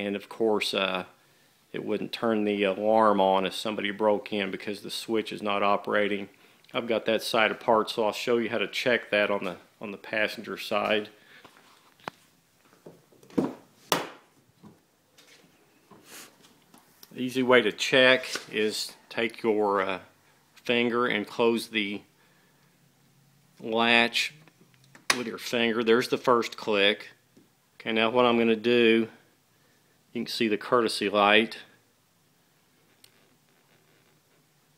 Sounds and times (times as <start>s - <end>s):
Speech: 0.0s - 11.2s, 17.1s - 22.1s, 23.6s - 24.4s, 25.2s - 27.2s, 27.8s - 29.2s, 30.1s - 31.8s.